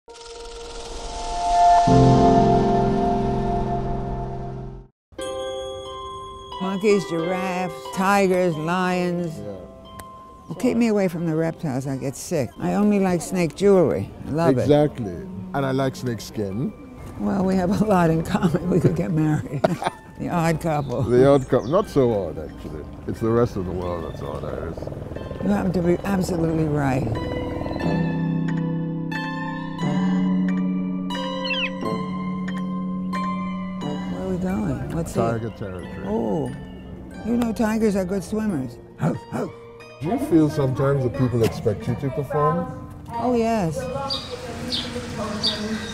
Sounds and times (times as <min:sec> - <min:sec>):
Music: 0:00.1 - 0:45.9.